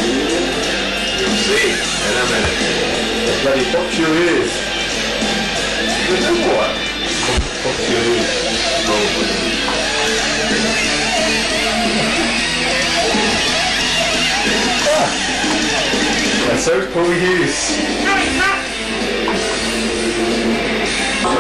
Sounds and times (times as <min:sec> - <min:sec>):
Music: 0:00.0 - 0:21.4
Speech: 0:16.4 - 0:18.7.